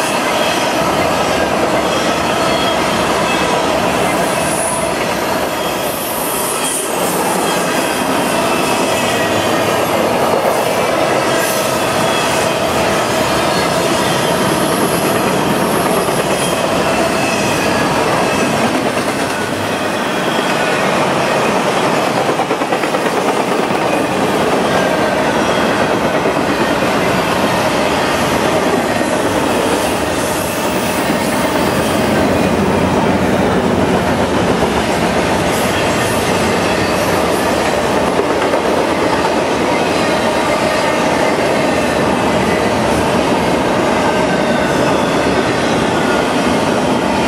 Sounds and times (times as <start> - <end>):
Railroad car, train wagon: 0.0 - 47.2
Train: 0.0 - 47.2
Clickety-clack: 20.5 - 32.6, 33.4 - 41.5.